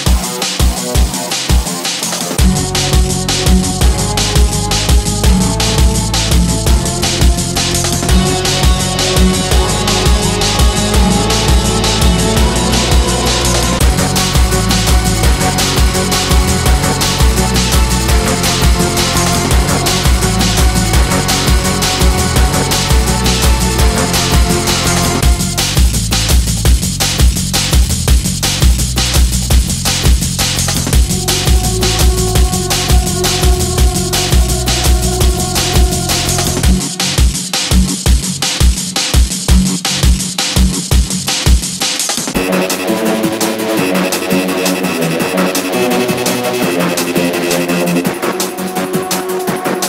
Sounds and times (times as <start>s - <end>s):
Music: 0.0s - 49.8s.